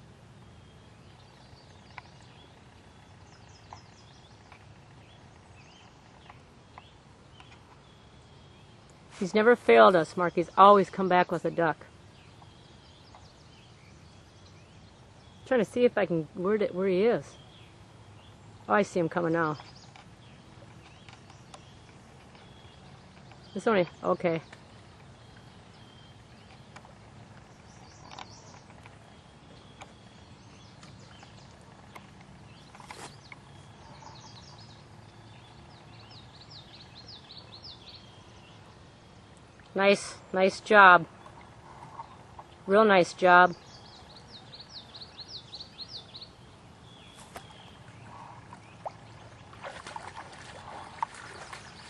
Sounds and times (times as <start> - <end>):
Animal: 32.8 - 34.6.